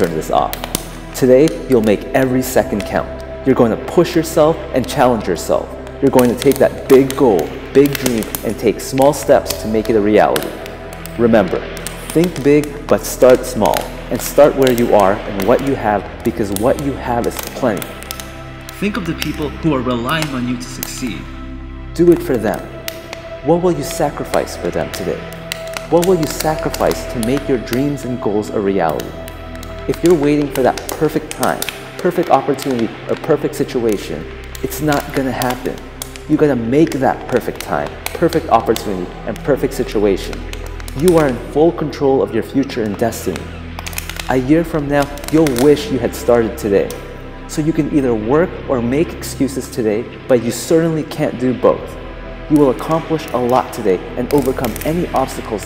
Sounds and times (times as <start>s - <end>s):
Speech: 0.0s - 18.0s, 18.7s - 21.4s, 22.0s - 29.2s, 29.8s - 43.6s, 44.3s - 55.6s
Music: 0.0s - 55.6s.